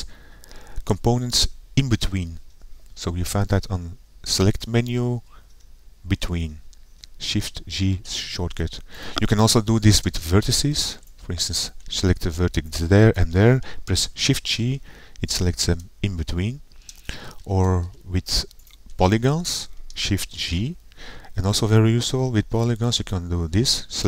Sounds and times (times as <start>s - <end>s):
Speech: 0.8s - 2.4s, 3.0s - 5.4s, 6.1s - 6.6s, 7.2s - 16.7s, 17.4s - 20.8s, 21.4s - 24.0s.